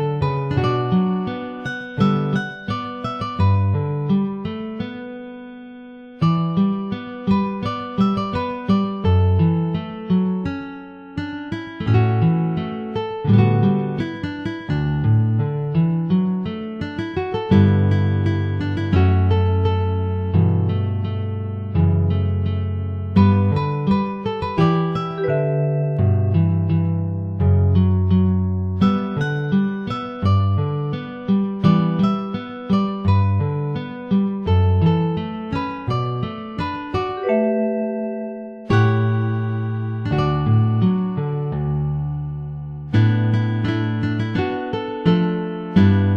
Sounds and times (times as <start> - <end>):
Strum: 6.2 - 46.1.